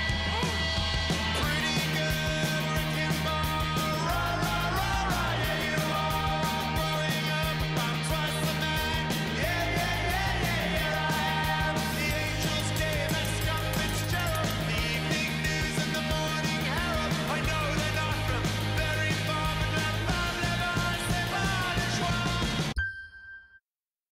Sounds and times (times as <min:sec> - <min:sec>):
Rhythm and blues: 0:00.0 - 0:22.8
Pop music: 0:00.0 - 0:22.9.